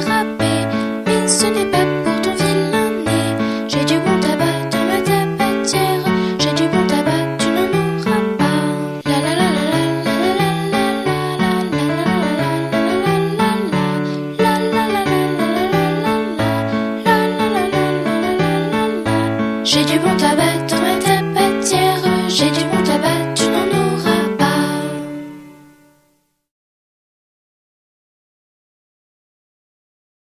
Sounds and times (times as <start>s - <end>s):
Music: 0.0s - 26.5s.